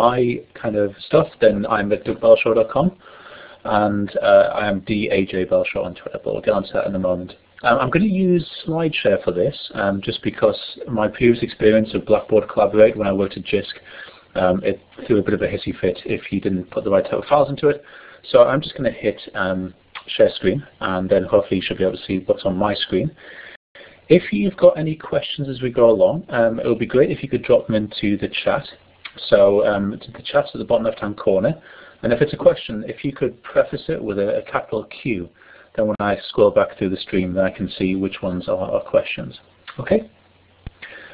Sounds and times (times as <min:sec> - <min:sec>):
Speech: 0:00.0 - 0:03.0, 0:03.6 - 0:23.2, 0:24.1 - 0:40.2.